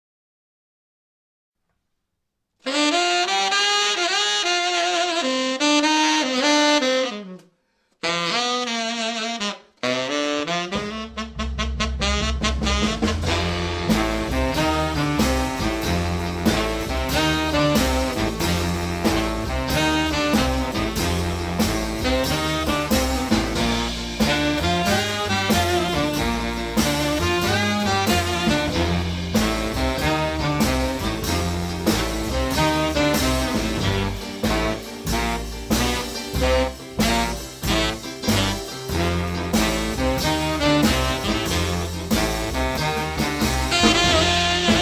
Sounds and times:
Jazz: 0:02.6 - 0:44.8.

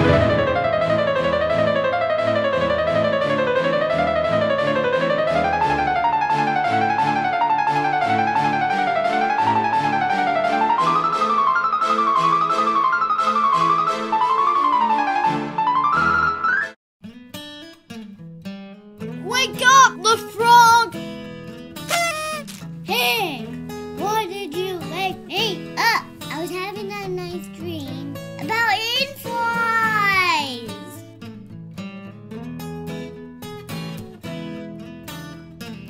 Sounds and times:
Music: 0:00.0 - 0:35.9
Speech: 0:19.2 - 0:21.0, 0:22.3 - 0:31.0.

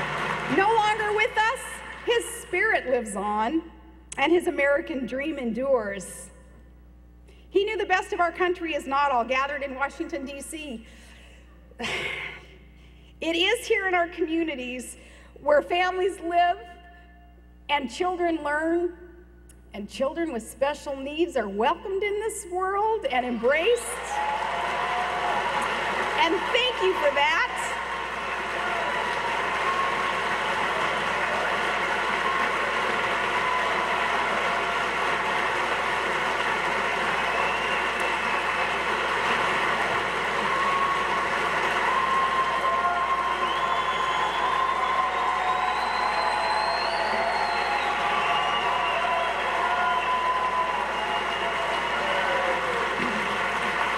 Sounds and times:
Female speech, woman speaking: 0:00.5 - 0:06.4, 0:07.6 - 0:10.8, 0:13.2 - 0:16.8, 0:17.7 - 0:19.0, 0:19.8 - 0:24.2, 0:26.2 - 0:27.8.

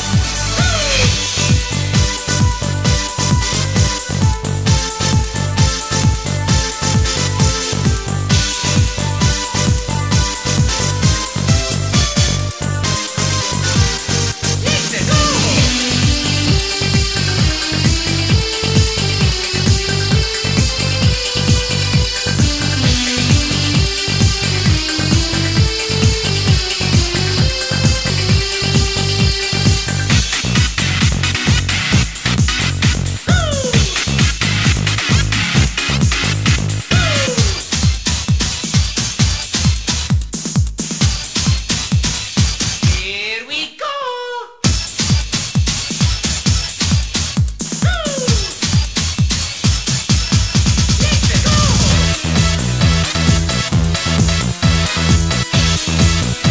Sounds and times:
Exciting music: 0:00.0 - 0:38.2, 0:47.9 - 0:56.5.

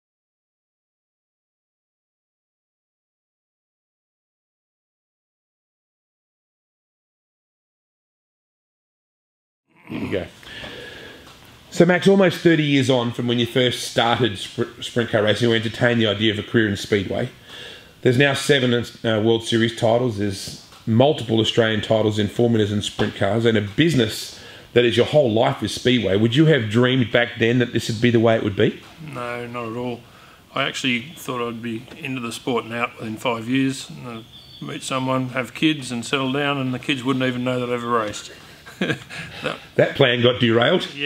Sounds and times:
Speech: 0:09.8 - 0:10.4, 0:11.7 - 0:17.4, 0:18.0 - 0:41.0.

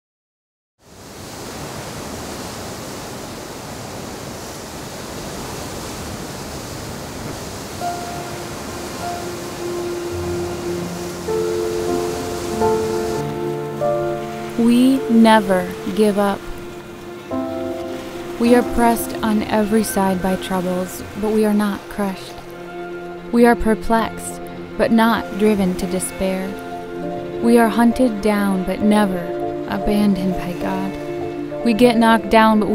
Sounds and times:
Outside, rural or natural: 0:00.8 - 0:32.7
Pink noise: 0:07.2 - 0:22.6
Music: 0:07.8 - 0:32.7.

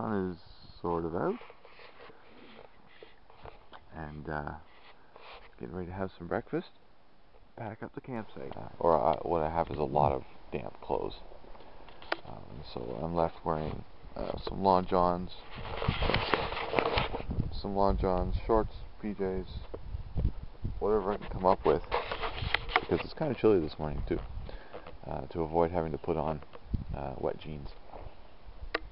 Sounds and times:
Speech: 0:00.0 - 0:01.5, 0:03.9 - 0:04.7, 0:05.6 - 0:06.8, 0:07.6 - 0:11.3, 0:12.3 - 0:15.5, 0:17.5 - 0:19.7, 0:20.8 - 0:21.9, 0:22.9 - 0:24.2, 0:25.0 - 0:27.8.

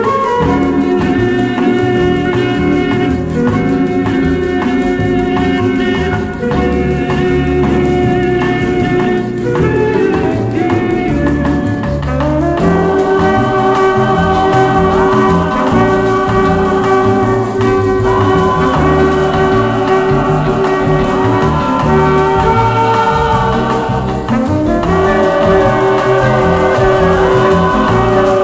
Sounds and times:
Swing music: 0:00.0 - 0:28.4.

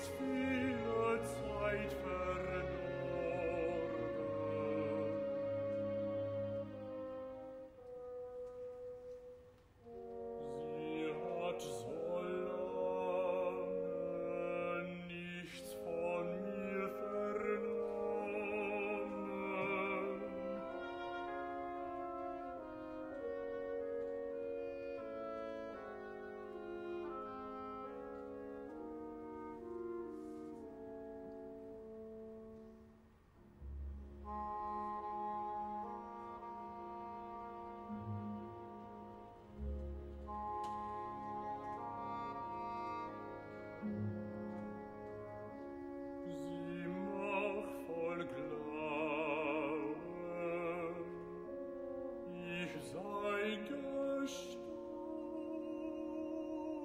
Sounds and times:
Male singing: 0:00.0 - 0:05.4, 0:10.6 - 0:20.9, 0:46.3 - 0:51.3, 0:52.3 - 0:56.8
Music: 0:00.0 - 0:56.8.

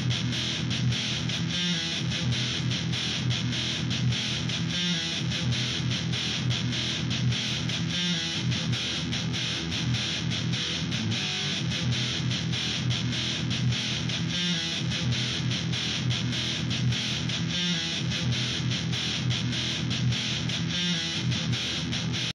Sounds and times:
Music: 0:00.0 - 0:22.3.

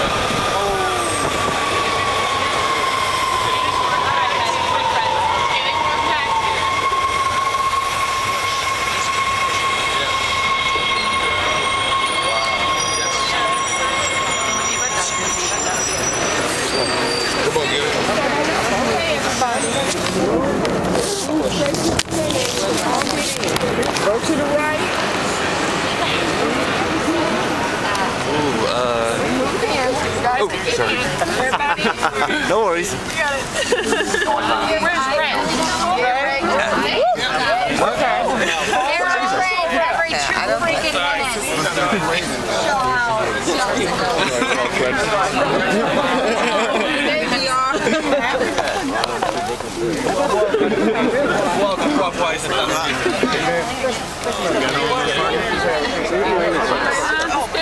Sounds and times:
Speech: 0:08.2 - 0:57.6.

